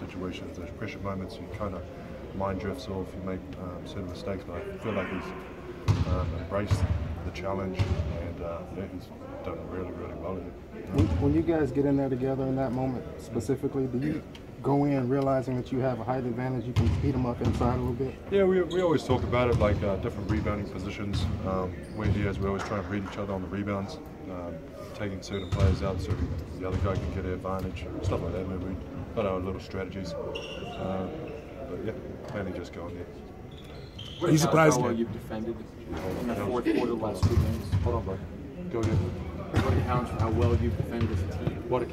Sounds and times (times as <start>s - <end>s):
Speech: 2.4s - 5.4s.